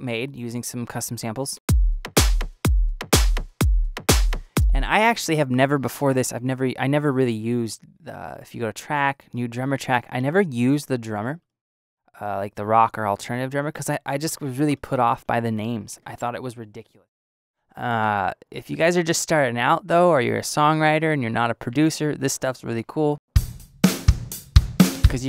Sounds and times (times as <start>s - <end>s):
Snare drum: 1.7s - 4.9s, 23.4s - 25.2s
Bass drum: 1.7s - 5.0s, 23.4s - 25.2s
Drum kit: 1.7s - 5.1s, 23.4s - 25.2s.